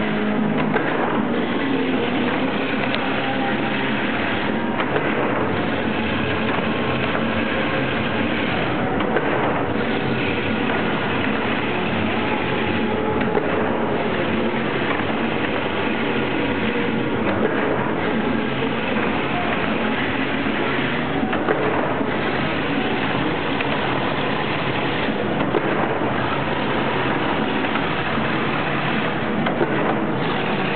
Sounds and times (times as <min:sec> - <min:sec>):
Heavy engine (low frequency): 0:00.0 - 0:30.7.